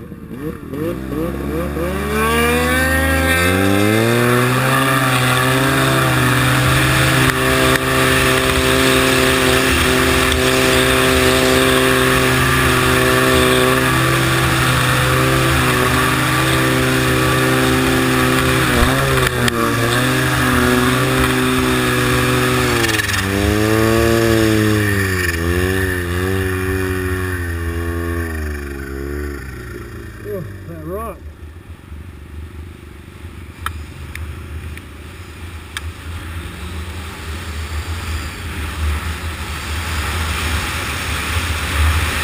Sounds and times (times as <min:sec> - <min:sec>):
Speech: 0:30.2 - 0:31.2.